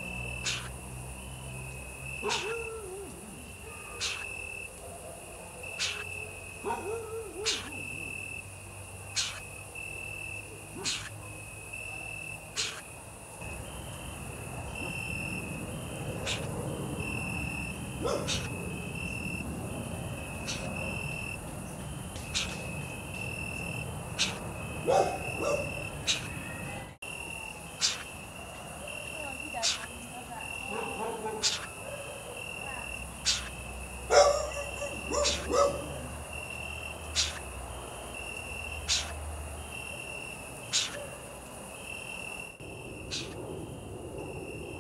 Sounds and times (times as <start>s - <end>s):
Owl: 0.4s - 0.8s, 2.2s - 4.6s, 5.7s - 6.3s, 7.0s - 8.3s, 9.1s - 9.5s, 10.8s - 11.3s, 12.5s - 12.9s, 16.2s - 16.6s, 18.1s - 18.6s, 20.4s - 21.0s, 22.2s - 22.7s, 24.2s - 24.5s, 25.3s - 26.6s, 27.8s - 28.2s, 29.6s - 30.0s, 31.4s - 31.8s, 33.2s - 33.6s, 35.0s - 35.6s, 37.2s - 37.5s, 38.9s - 39.2s, 40.7s - 41.2s, 43.1s - 43.4s.